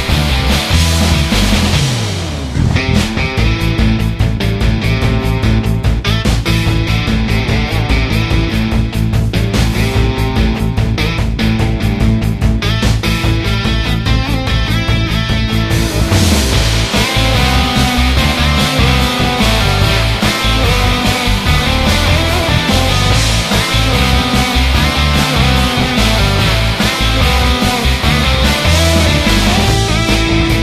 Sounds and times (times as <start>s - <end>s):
Theme music: 0.0s - 6.2s, 13.5s - 30.6s.